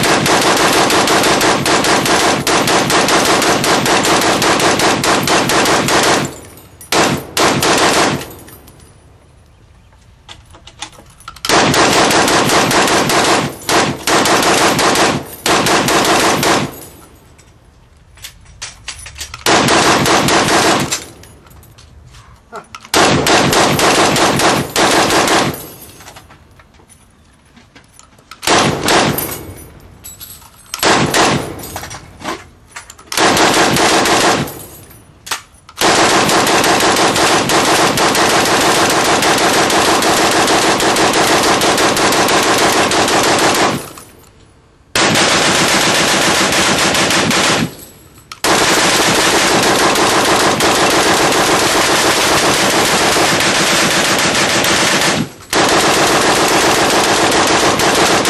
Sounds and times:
Machine gun: 0:00.0 - 0:08.4, 0:11.5 - 0:16.8, 0:19.5 - 0:21.1, 0:22.9 - 0:25.7, 0:28.5 - 0:29.4, 0:30.8 - 0:31.6, 0:33.2 - 0:34.6, 0:35.8 - 0:44.0, 0:45.0 - 0:47.8, 0:48.4 - 0:58.2.

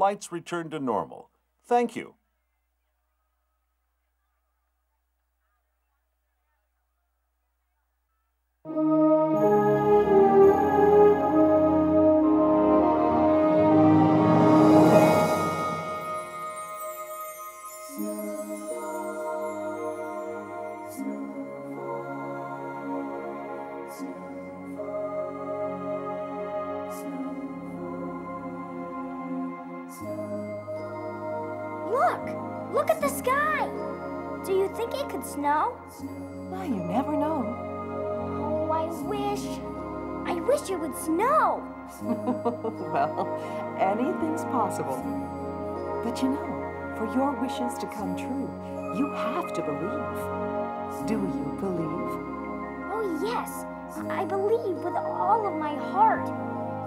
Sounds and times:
Happy music: 0:00.0 - 0:02.1, 0:08.7 - 0:56.8
Soundtrack music: 0:08.7 - 0:56.8.

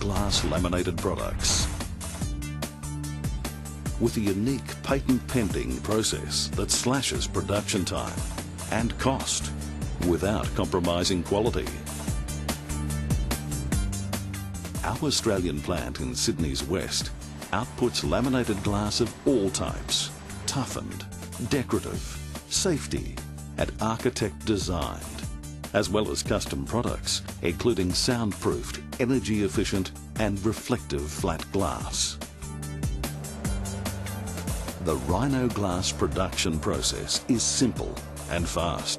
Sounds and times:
Speech: 0:00.0 - 0:01.8, 0:04.0 - 0:11.8, 0:14.8 - 0:32.2, 0:34.8 - 0:38.9
Music: 0:00.0 - 0:38.9.

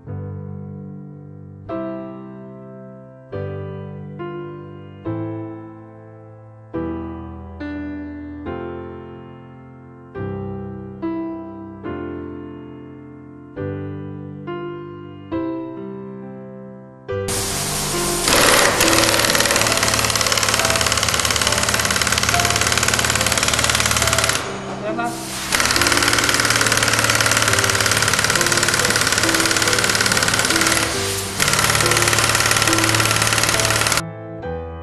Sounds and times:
Music: 0:00.0 - 0:34.8
Speech: 0:24.8 - 0:25.2.

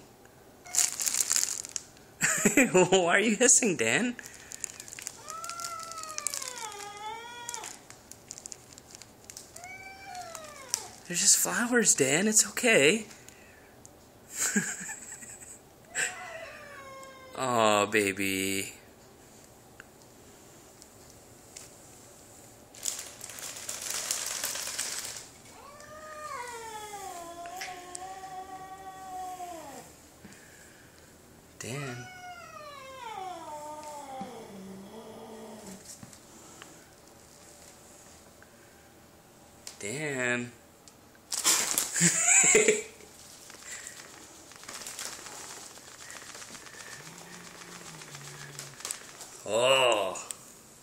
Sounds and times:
Caterwaul: 0:05.2 - 0:07.8, 0:09.6 - 0:11.0, 0:15.9 - 0:17.4, 0:25.5 - 0:29.9, 0:31.6 - 0:35.8
Speech: 0:11.1 - 0:13.1, 0:17.4 - 0:18.8, 0:31.6 - 0:32.1, 0:49.4 - 0:50.3.

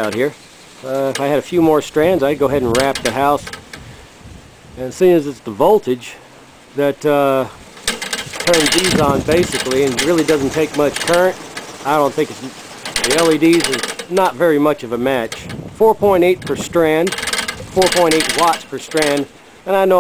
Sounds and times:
Speech: 0:00.0 - 0:03.5, 0:04.8 - 0:06.2, 0:06.8 - 0:07.6, 0:08.4 - 0:17.1, 0:17.7 - 0:20.0.

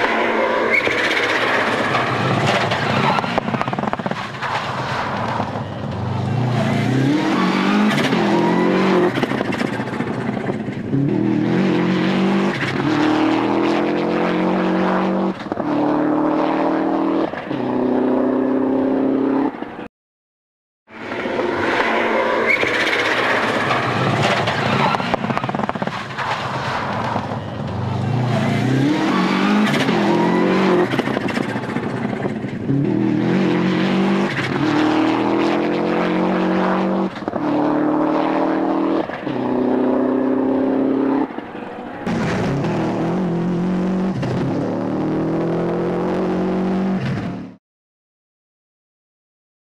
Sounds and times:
Car: 0:00.0 - 0:19.9, 0:20.9 - 0:47.6.

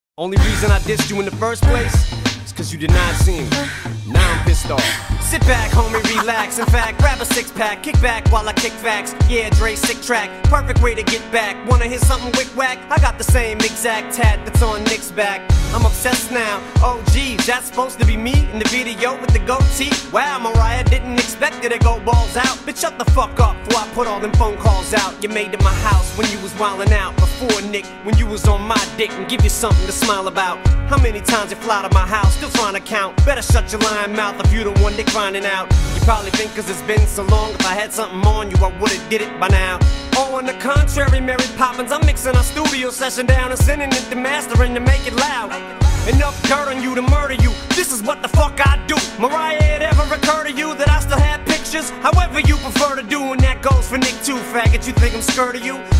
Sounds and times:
Rapping: 0:00.2 - 0:55.9.

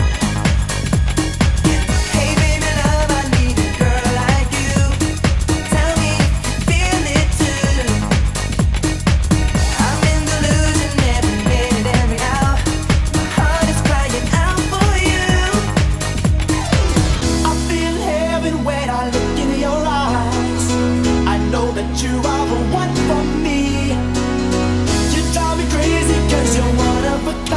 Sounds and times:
Music: 0:00.0 - 0:27.5.

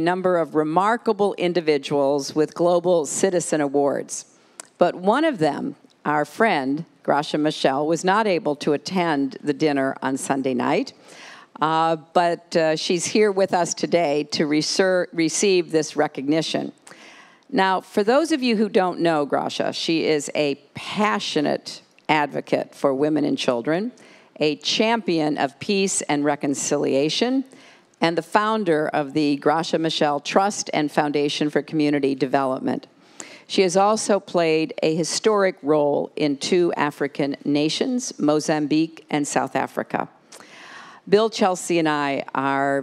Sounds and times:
Speech: 0:33.5 - 0:40.1.

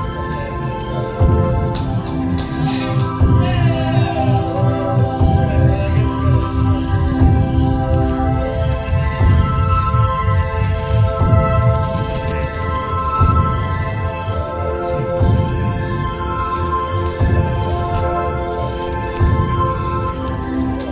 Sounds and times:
Music: 0:00.0 - 0:20.9.

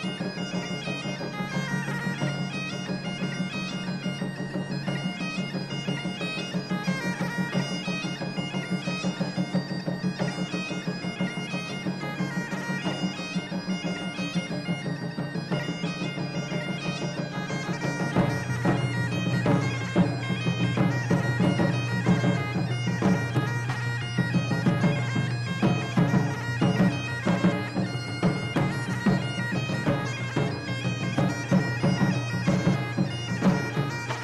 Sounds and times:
Bagpipes: 0:00.0 - 0:34.2
Drum: 0:14.8 - 0:34.2.

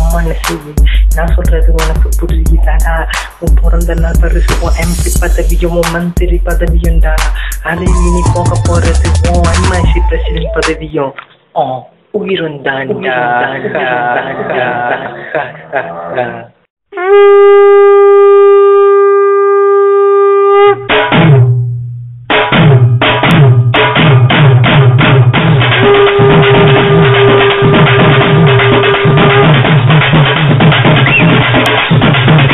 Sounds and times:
Music: 0:00.0 - 0:10.9, 0:20.2 - 0:32.5.

